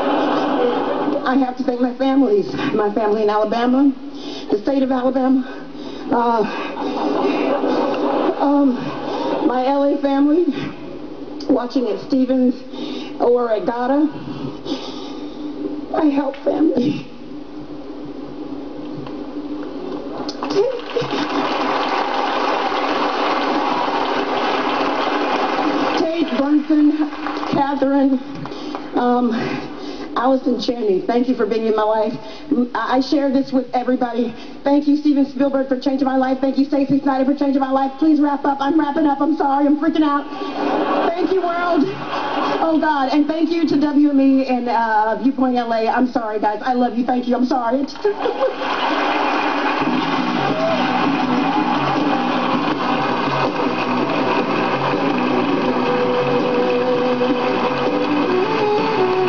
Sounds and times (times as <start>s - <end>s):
Narration, monologue: 0.8s - 20.8s, 25.6s - 48.3s
Female speech, woman speaking: 1.2s - 5.5s, 6.1s - 6.6s, 8.4s - 8.8s, 9.4s - 10.6s, 11.4s - 14.2s, 15.9s - 17.1s, 26.0s - 28.3s, 29.0s - 29.5s, 30.2s - 40.3s, 41.0s - 42.0s, 42.6s - 48.2s.